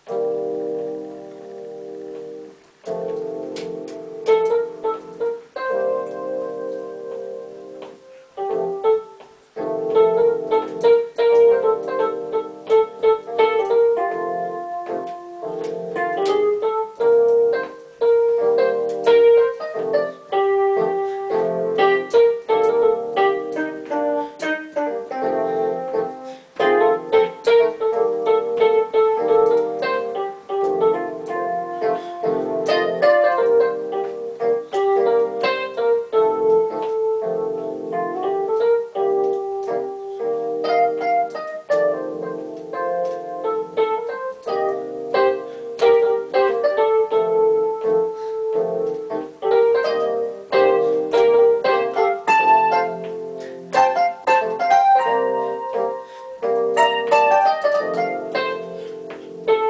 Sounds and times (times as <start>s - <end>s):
Electric piano: 0.0s - 59.7s.